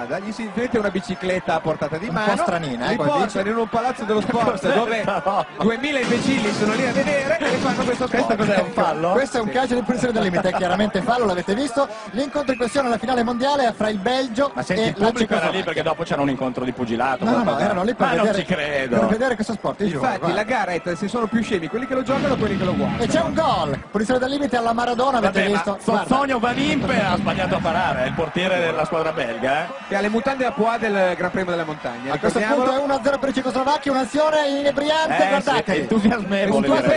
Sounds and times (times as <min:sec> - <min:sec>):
Speech: 0:00.0 - 0:36.9.